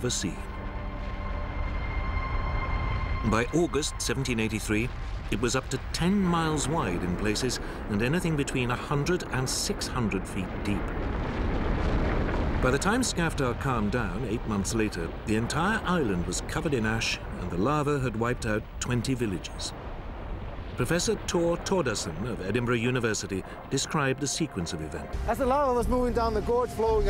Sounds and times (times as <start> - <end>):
Speech: 0.0 - 0.5, 3.3 - 10.9, 12.6 - 19.7, 20.8 - 27.1
Eruption: 0.0 - 27.1.